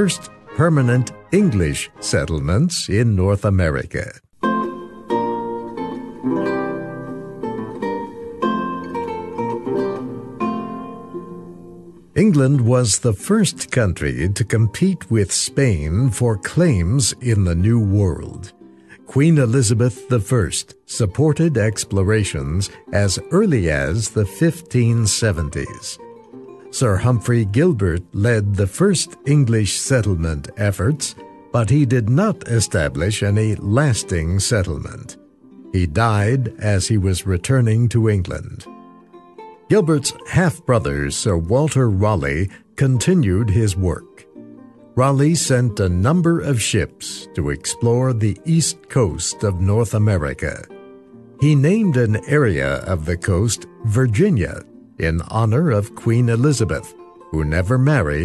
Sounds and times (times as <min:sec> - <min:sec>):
Pizzicato: 0:04.4 - 0:13.7, 0:25.4 - 0:26.9.